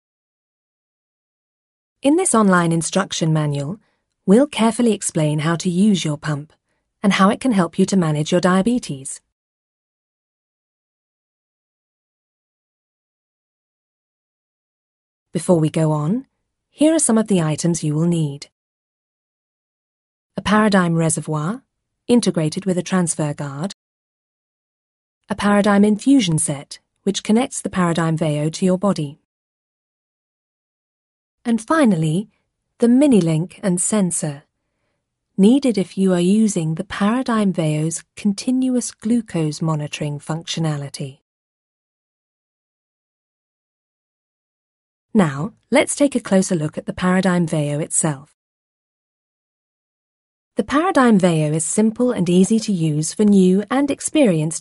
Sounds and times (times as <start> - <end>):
Speech: 2.0 - 9.3, 15.4 - 18.6, 20.4 - 23.8, 25.3 - 29.3, 31.5 - 34.4, 35.4 - 41.2, 45.2 - 48.4, 50.6 - 54.6.